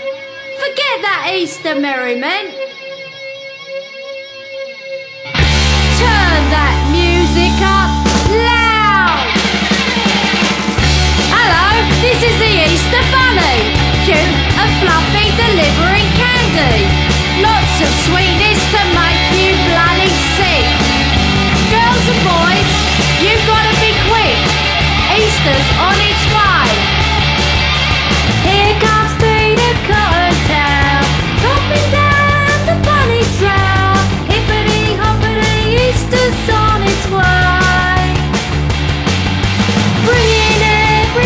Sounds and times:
Rock and roll: 0:00.0 - 0:41.2
Progressive rock: 0:02.5 - 0:41.2
Heavy metal: 0:05.0 - 0:41.2
Punk rock: 0:05.2 - 0:41.2
Exciting music: 0:05.3 - 0:41.2.

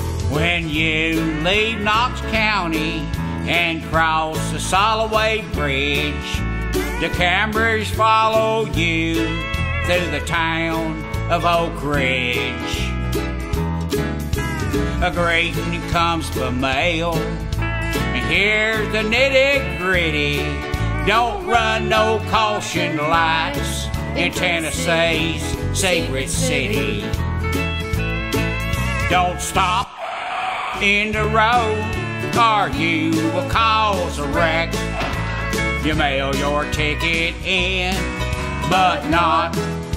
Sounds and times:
Country: 0:00.0 - 0:30.0, 0:30.6 - 0:39.9
Funny music: 0:00.0 - 0:30.0, 0:30.7 - 0:39.9.

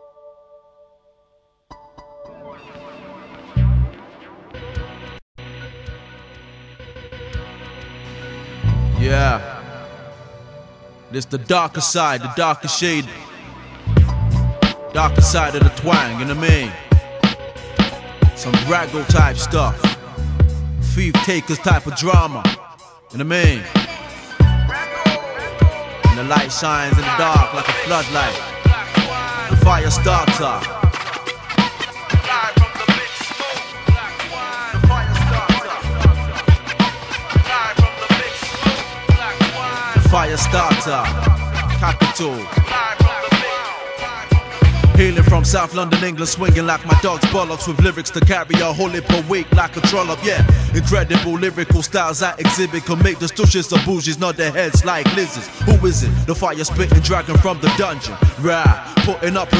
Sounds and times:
Music: 0:00.0 - 0:59.5.

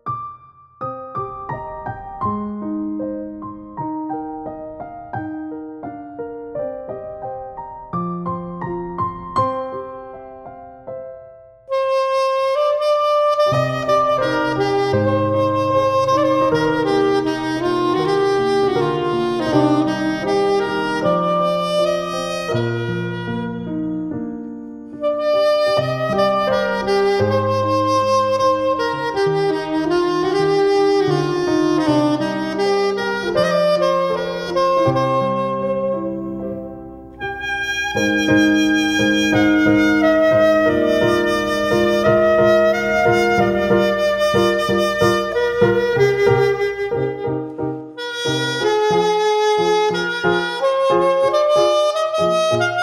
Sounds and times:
Music: 0:00.0 - 0:52.8.

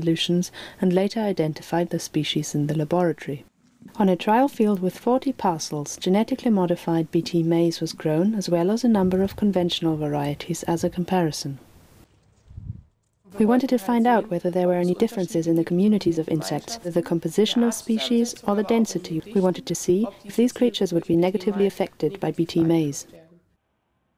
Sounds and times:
Speech: 0:00.0 - 0:11.6, 0:13.3 - 0:23.4.

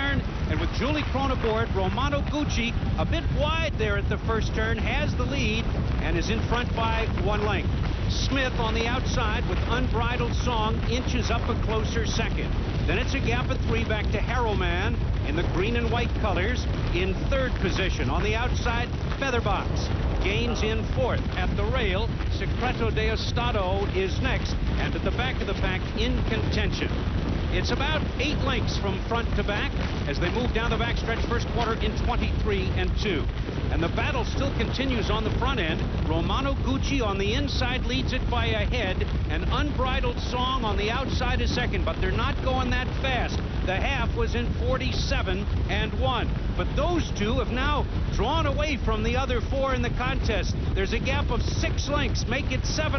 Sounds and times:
Speech: 0:00.0 - 0:52.9.

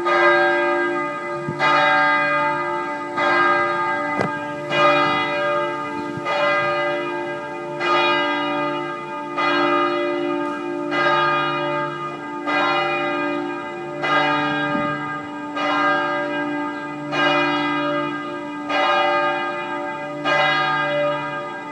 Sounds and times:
Church bell: 0:00.0 - 0:21.7.

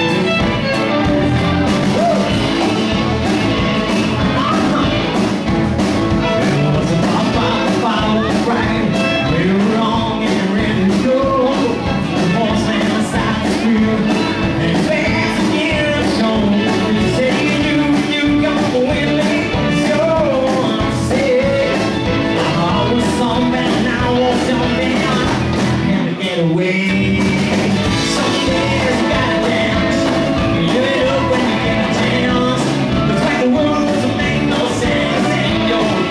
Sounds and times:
Country: 0:00.0 - 0:36.1.

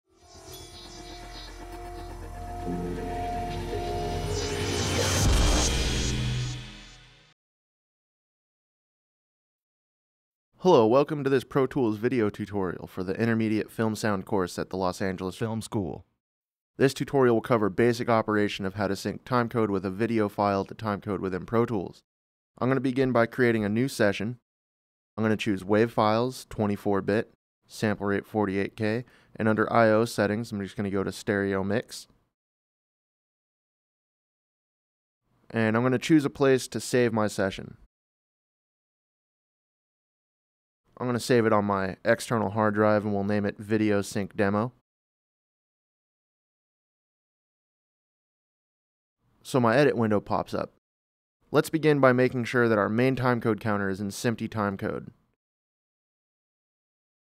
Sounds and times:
Speech: 0:10.6 - 0:16.1, 0:16.8 - 0:22.0, 0:22.6 - 0:24.4, 0:25.2 - 0:32.1, 0:35.5 - 0:37.9, 0:41.0 - 0:44.8, 0:49.4 - 0:50.8, 0:51.5 - 0:55.2.

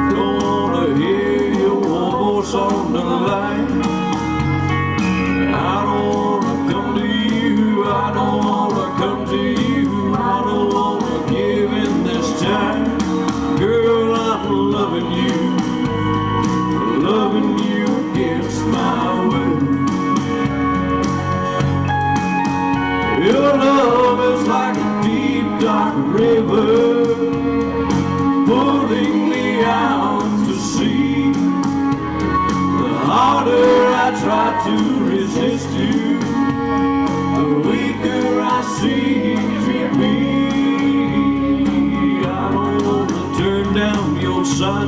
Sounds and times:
Male singing: 0:00.0 - 0:04.0, 0:05.5 - 0:16.0, 0:16.8 - 0:20.0, 0:23.2 - 0:27.5, 0:28.4 - 0:31.6, 0:32.8 - 0:36.6, 0:37.4 - 0:44.8
Music: 0:00.0 - 0:44.8.

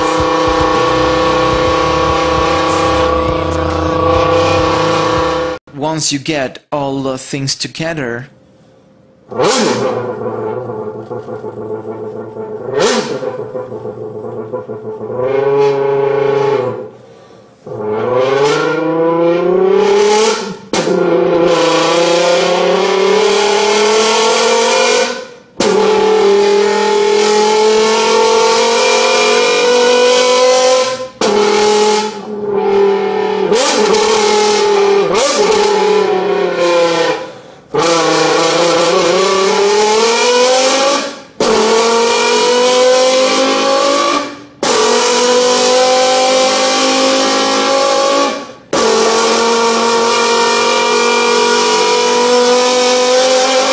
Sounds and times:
Speech: 0:05.7 - 0:08.3.

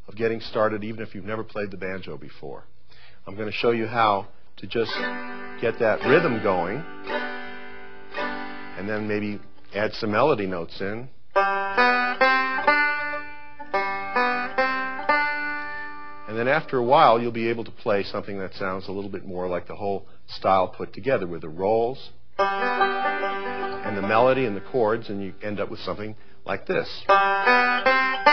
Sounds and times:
Speech: 0:00.1 - 0:02.7, 0:03.3 - 0:05.0, 0:05.6 - 0:06.9, 0:08.8 - 0:11.1, 0:16.3 - 0:22.2, 0:23.9 - 0:27.1
Banjo: 0:04.8 - 0:10.3, 0:11.3 - 0:17.4, 0:22.4 - 0:26.0, 0:26.8 - 0:28.3.

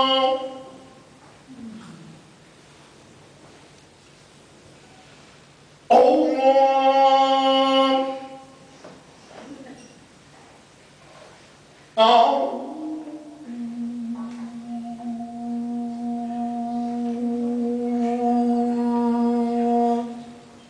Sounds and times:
Mantra: 0:00.0 - 0:01.9, 0:05.9 - 0:08.7, 0:12.0 - 0:20.6.

